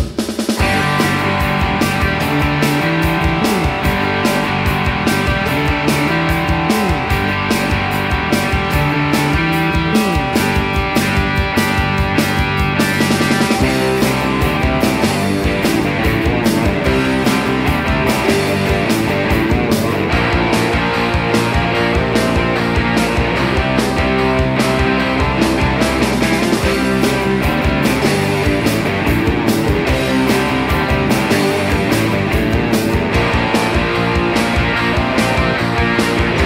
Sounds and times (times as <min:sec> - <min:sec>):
Progressive rock: 0:00.0 - 0:36.4.